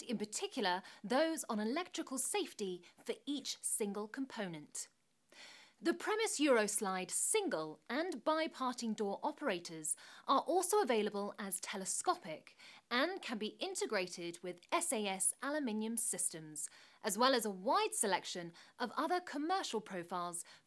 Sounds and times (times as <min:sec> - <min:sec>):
Speech: 0:00.0 - 0:04.9, 0:05.8 - 0:20.5.